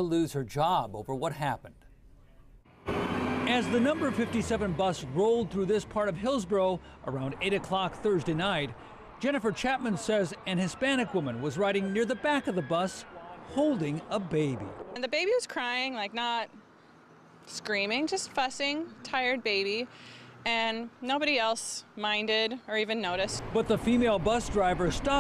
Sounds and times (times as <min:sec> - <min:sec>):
Bus: 0:02.7 - 0:10.2, 0:14.8 - 0:25.2.